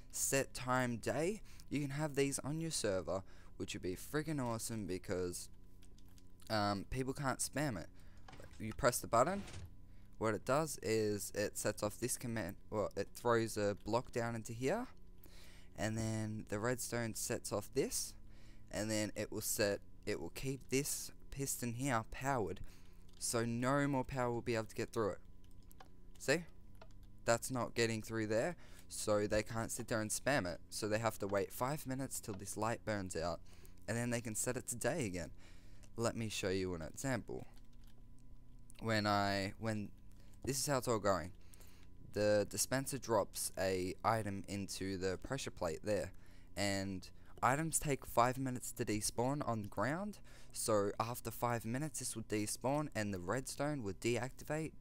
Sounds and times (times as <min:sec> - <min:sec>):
Speech: 0:00.1 - 0:05.5, 0:06.4 - 0:07.9, 0:08.5 - 0:09.6, 0:10.2 - 0:15.0, 0:15.8 - 0:22.6, 0:23.2 - 0:25.2, 0:26.2 - 0:26.5, 0:27.2 - 0:35.3, 0:36.0 - 0:37.5, 0:38.8 - 0:41.4, 0:42.1 - 0:54.8.